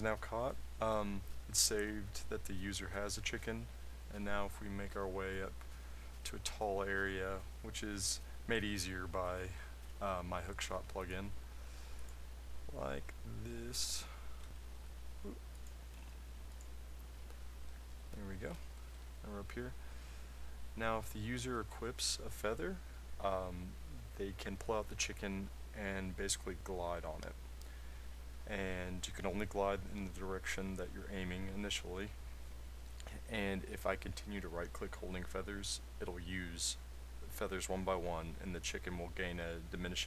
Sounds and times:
Speech: 0:00.0 - 0:05.6, 0:06.2 - 0:11.4, 0:12.7 - 0:14.2, 0:18.1 - 0:19.8, 0:20.8 - 0:27.4, 0:28.5 - 0:32.2, 0:33.0 - 0:40.0.

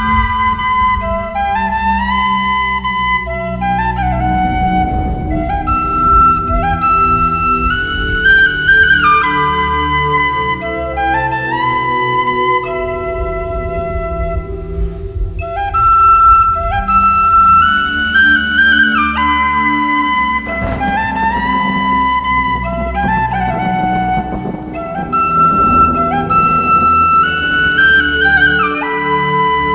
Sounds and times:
Flute: 0:00.0 - 0:29.7.

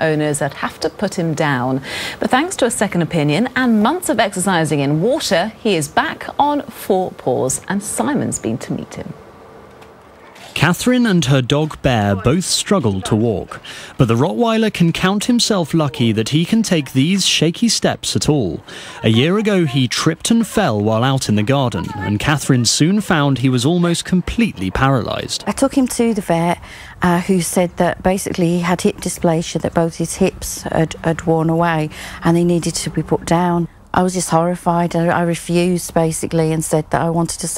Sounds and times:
Speech: 0:00.0 - 0:09.2, 0:10.6 - 0:37.5.

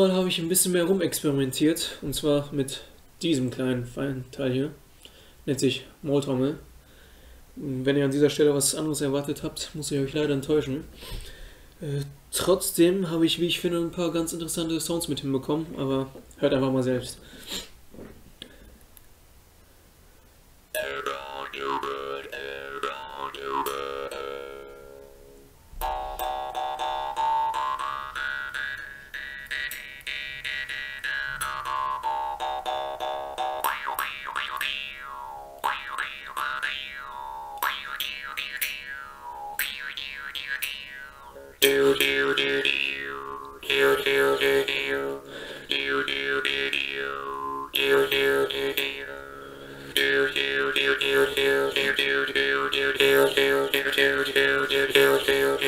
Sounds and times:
Speech: 0:00.0 - 0:04.8, 0:05.5 - 0:06.7, 0:07.6 - 0:10.9, 0:11.8 - 0:17.2.

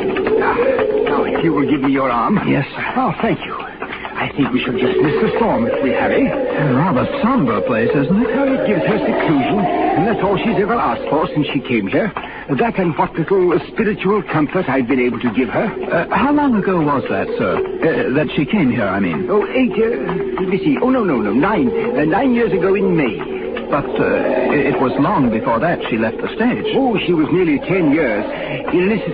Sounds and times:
Radio: 0:00.0 - 0:29.1
Speech: 0:00.4 - 0:29.1.

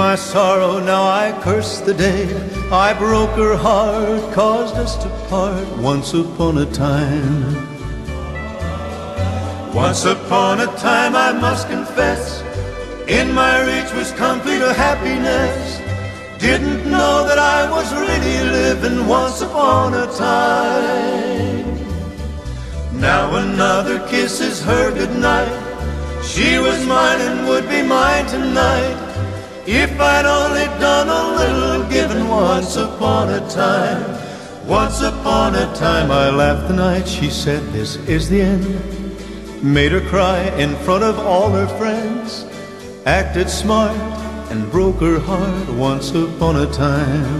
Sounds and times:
Male singing: 0:00.0 - 0:07.7, 0:08.6 - 0:12.5, 0:13.1 - 0:15.8, 0:16.4 - 0:21.7, 0:22.9 - 0:38.9, 0:39.6 - 0:47.3
Choir: 0:08.0 - 0:37.9.

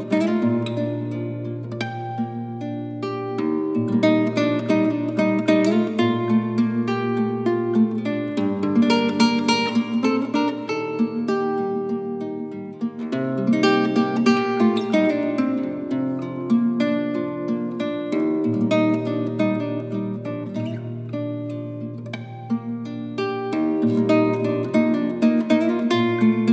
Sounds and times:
Music: 0:00.0 - 0:26.5.

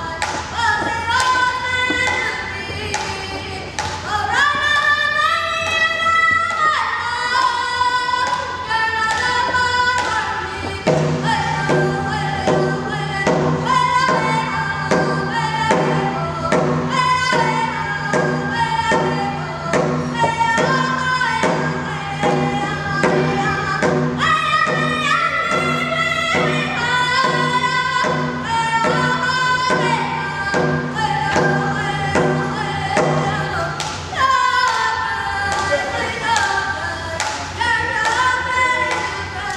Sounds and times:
Music: 0:00.0 - 0:39.5
Singing: 0:00.0 - 0:39.5.

